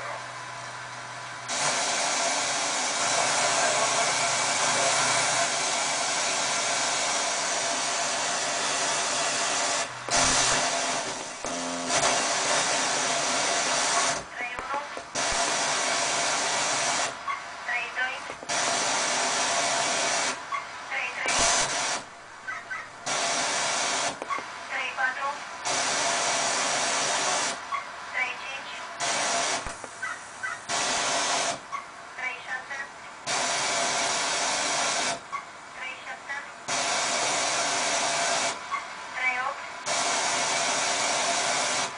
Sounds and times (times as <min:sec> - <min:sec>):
Radio: 0:02.9 - 0:06.5, 0:13.3 - 0:15.9, 0:17.0 - 0:19.1, 0:20.0 - 0:22.0, 0:24.0 - 0:25.5, 0:27.1 - 0:29.8, 0:32.2 - 0:33.0, 0:35.8 - 0:36.6, 0:38.2 - 0:39.7
Speech: 0:14.4 - 0:15.0, 0:17.7 - 0:18.3, 0:20.9 - 0:21.4, 0:24.7 - 0:25.4, 0:28.2 - 0:28.9, 0:32.2 - 0:32.9, 0:35.8 - 0:36.5, 0:39.2 - 0:39.6.